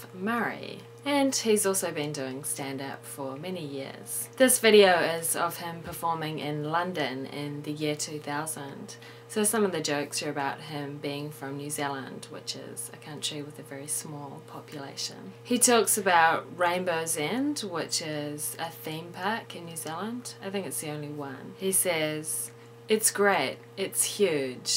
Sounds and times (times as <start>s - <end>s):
Speech: 0.0s - 24.7s.